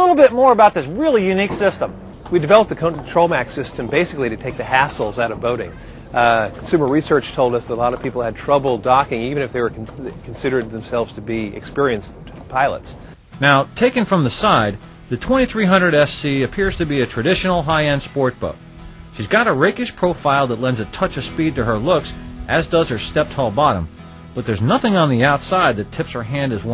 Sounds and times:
Music: 0:00.0 - 0:12.1, 0:13.0 - 0:26.7
Speech: 0:00.0 - 0:18.6, 0:19.2 - 0:26.7.

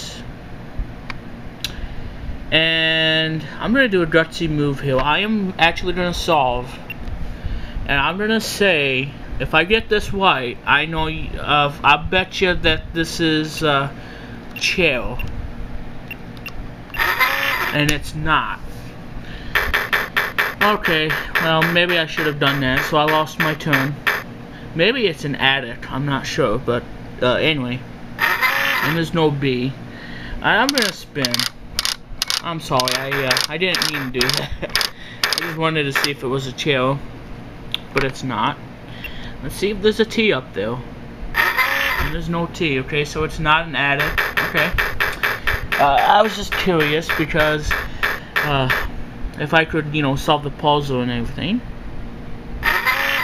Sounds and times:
Speech: 0:00.0 - 0:00.3, 0:02.5 - 0:06.8, 0:07.9 - 0:14.0, 0:14.6 - 0:15.3, 0:17.7 - 0:18.7, 0:20.6 - 0:24.0, 0:24.8 - 0:27.8, 0:28.8 - 0:29.8, 0:30.4 - 0:31.4, 0:32.4 - 0:34.5, 0:35.4 - 0:37.1, 0:37.9 - 0:38.6, 0:39.4 - 0:40.9, 0:42.1 - 0:44.8, 0:45.8 - 0:47.7, 0:48.4 - 0:51.7.

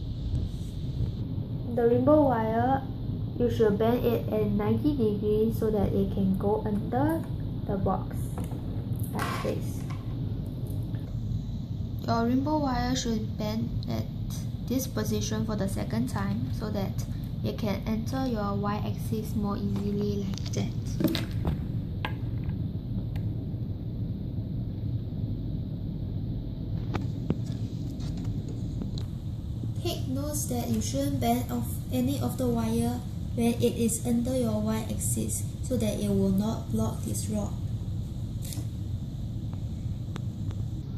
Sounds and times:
Speech: 0:01.7 - 0:08.4, 0:09.0 - 0:09.9, 0:12.0 - 0:21.1, 0:29.8 - 0:37.6.

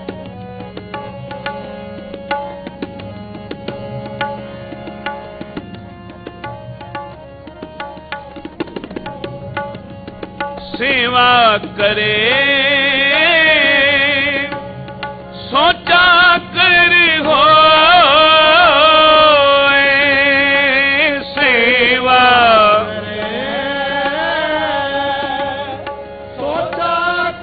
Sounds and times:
Tabla: 0:00.0 - 0:27.4.

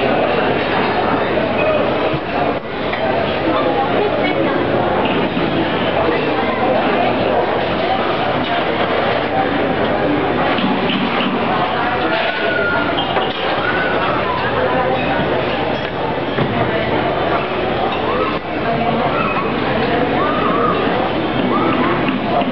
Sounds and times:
Speech: 0:00.0 - 0:22.5.

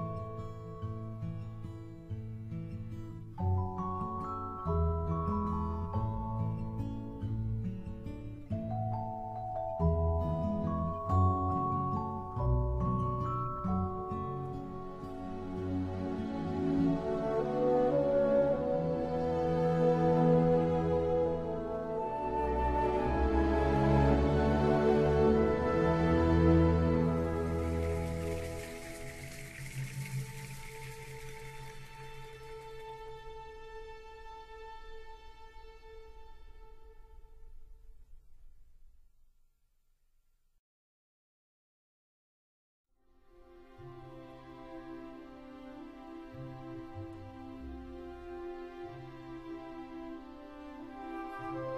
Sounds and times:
Music: 0:00.0 - 0:38.8, 0:43.0 - 0:51.7.

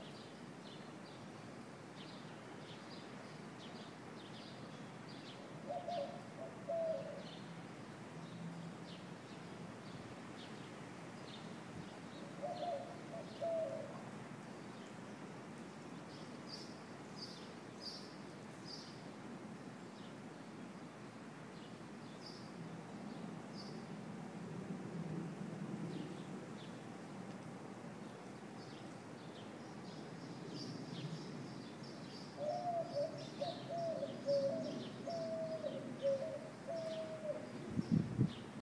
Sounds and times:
Coo: 0:05.6 - 0:07.3, 0:12.3 - 0:14.0, 0:32.4 - 0:37.6.

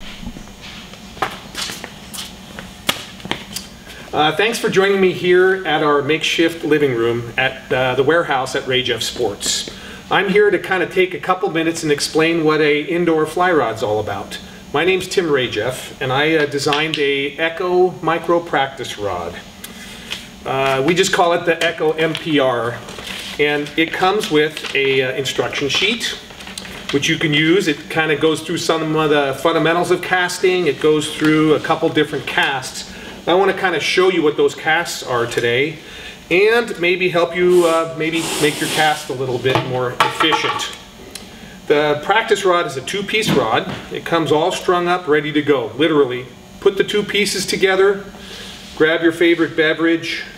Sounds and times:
Speech: 0:04.1 - 0:19.5, 0:20.4 - 0:22.8, 0:23.4 - 0:26.2, 0:26.9 - 0:40.8, 0:41.7 - 0:48.1, 0:48.8 - 0:50.3.

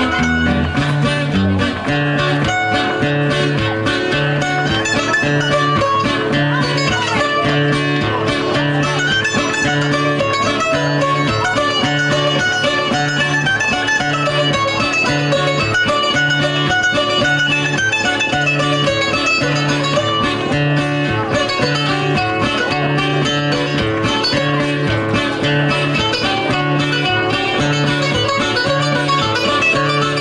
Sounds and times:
Mandolin: 0:00.0 - 0:30.2.

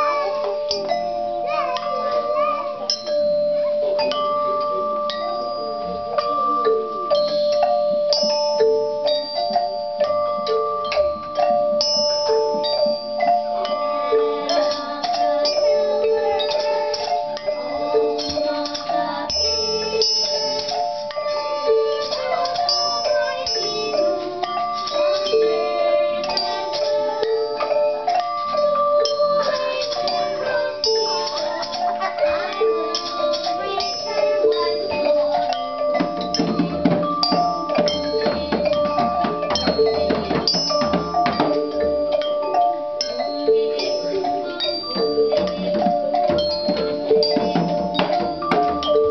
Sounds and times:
Music: 0:00.0 - 0:49.1.

